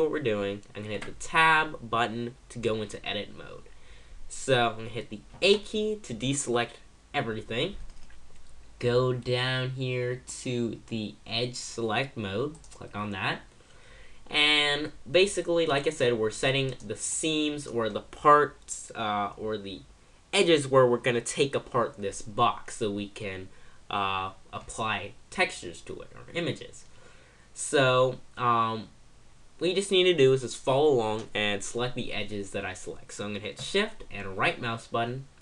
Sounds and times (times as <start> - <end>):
Speech: 0.0 - 3.7, 4.3 - 7.8, 8.8 - 13.5, 14.3 - 26.9, 27.6 - 29.0, 29.6 - 35.4
Computer keyboard: 7.8 - 8.5.